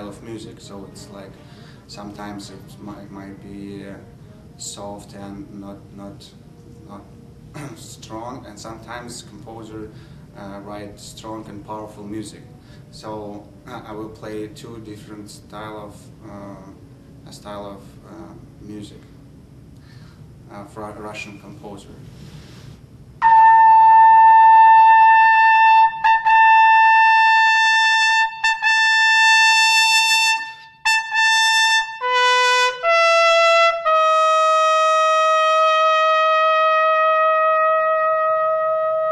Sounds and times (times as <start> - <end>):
Trumpet: 23.2 - 39.1.